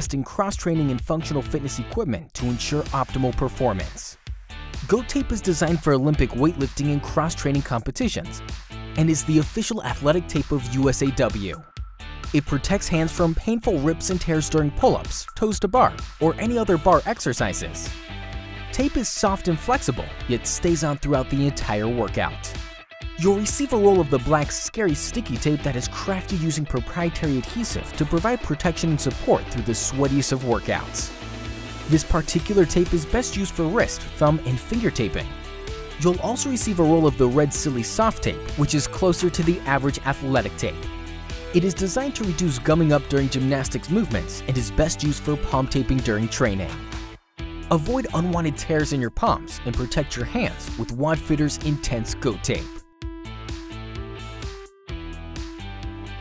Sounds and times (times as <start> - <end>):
Speech: 0.0 - 4.2, 4.8 - 8.4, 9.0 - 11.7, 12.4 - 17.9, 18.7 - 22.6, 23.2 - 31.1, 31.9 - 35.4, 36.0 - 40.8, 41.5 - 46.8, 47.7 - 52.8
Music: 0.0 - 56.2.